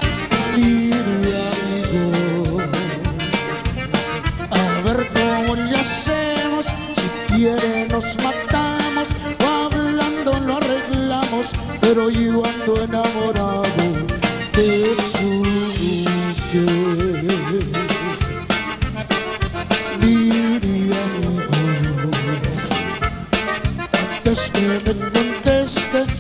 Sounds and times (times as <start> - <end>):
Blues: 0.0 - 26.2.